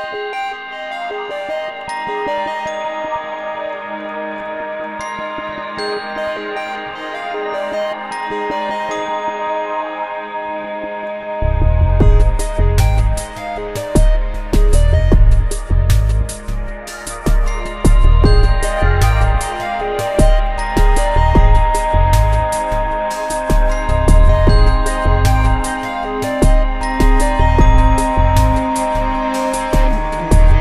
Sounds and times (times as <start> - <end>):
Music: 0.0 - 30.6.